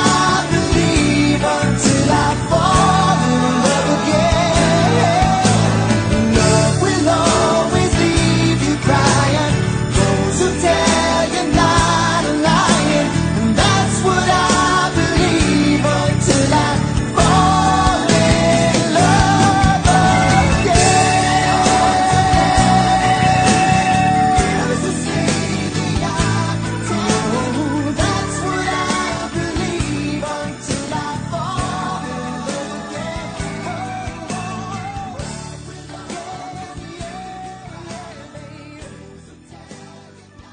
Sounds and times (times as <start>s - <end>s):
Music: 0.0s - 40.5s.